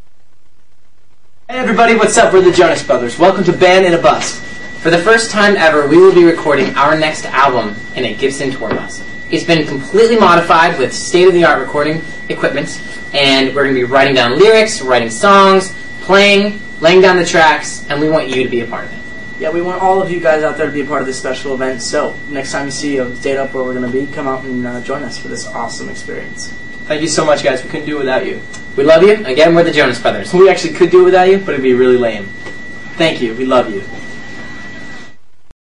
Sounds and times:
Speech: 0:01.5 - 0:32.4, 0:33.0 - 0:34.1.

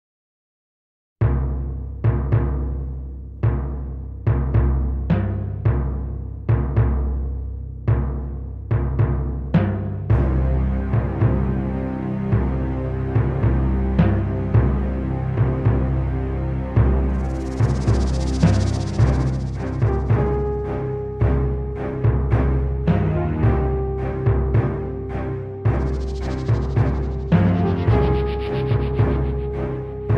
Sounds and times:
Timpani: 0:01.2 - 0:30.1.

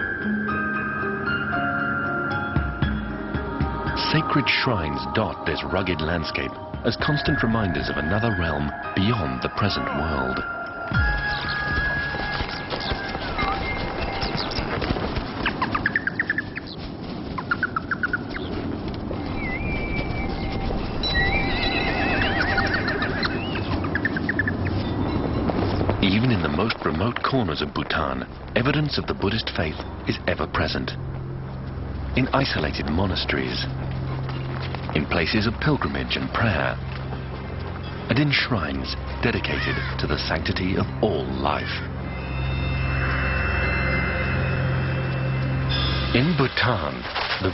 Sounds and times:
Music: 0:00.0 - 0:15.4, 0:19.3 - 0:47.5
Outside, rural or natural: 0:00.0 - 0:47.5
Speech: 0:04.0 - 0:10.4, 0:26.0 - 0:31.0, 0:32.2 - 0:33.7, 0:35.0 - 0:36.8, 0:38.1 - 0:41.9, 0:46.1 - 0:47.5
Bird: 0:11.0 - 0:16.8, 0:19.2 - 0:26.2.

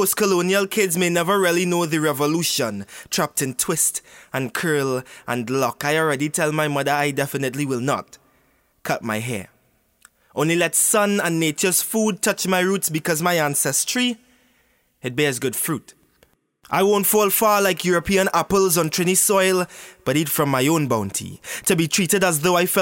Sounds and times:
Male speech, man speaking: 0:00.0 - 0:08.2, 0:08.8 - 0:09.6, 0:10.4 - 0:14.2, 0:15.0 - 0:16.0, 0:16.7 - 0:22.8.

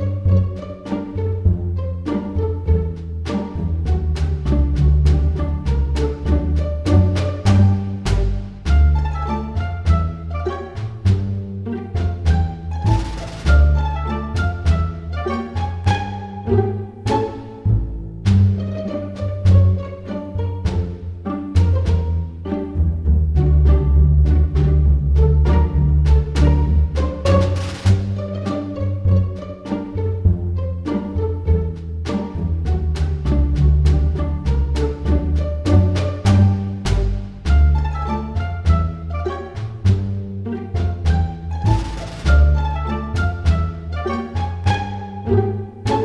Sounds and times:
Pizzicato: 0:00.0 - 0:46.0.

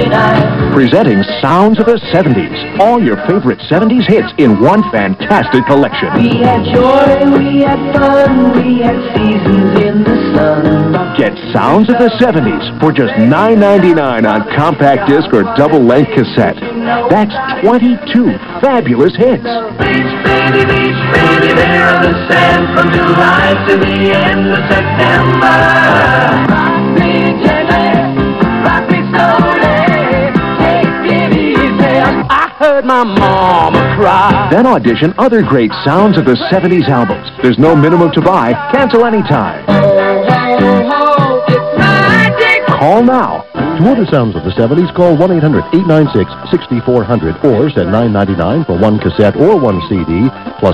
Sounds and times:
Music: 0:00.0 - 0:50.7
Television: 0:00.0 - 0:50.7.

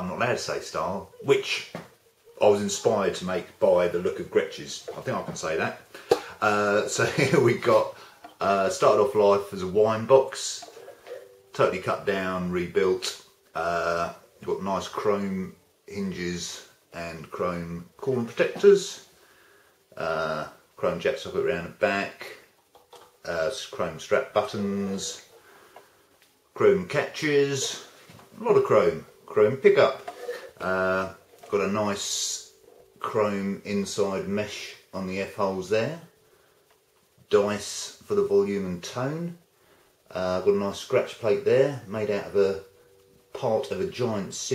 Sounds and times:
Speech: 0:00.0 - 0:10.8, 0:11.5 - 0:19.1, 0:20.0 - 0:22.5, 0:23.2 - 0:25.3, 0:26.6 - 0:36.2, 0:37.2 - 0:39.4, 0:40.1 - 0:42.7, 0:43.3 - 0:44.5.

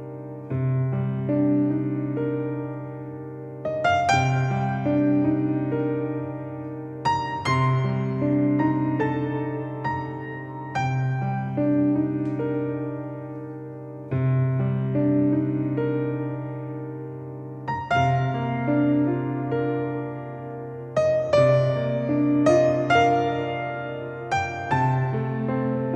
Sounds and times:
Music: 0:00.0 - 0:25.9.

